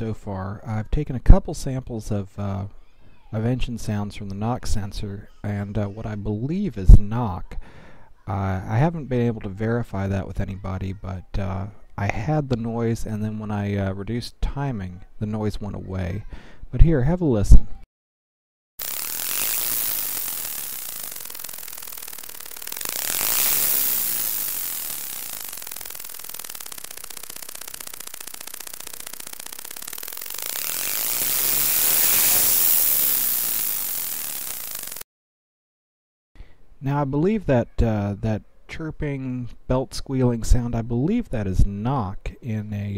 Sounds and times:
Speech: 0.0s - 7.6s, 8.2s - 17.8s, 36.8s - 42.9s
Whir: 18.8s - 35.1s.

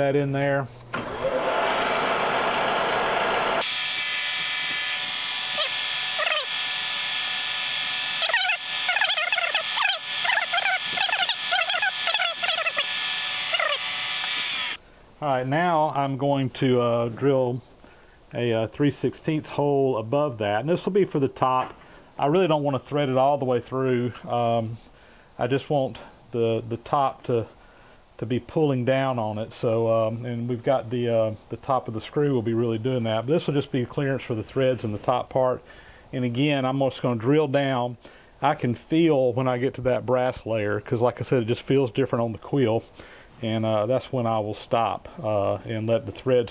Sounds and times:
Mechanisms: 0.0s - 46.5s.

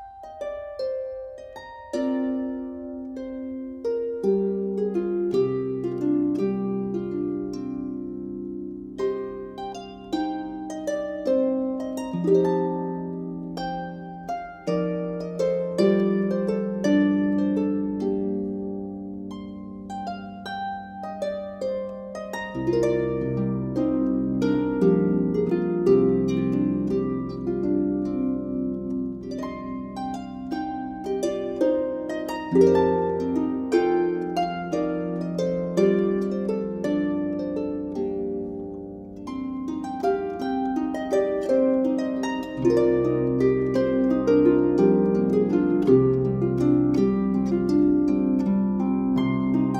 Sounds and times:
Harp: 0.0s - 49.7s.

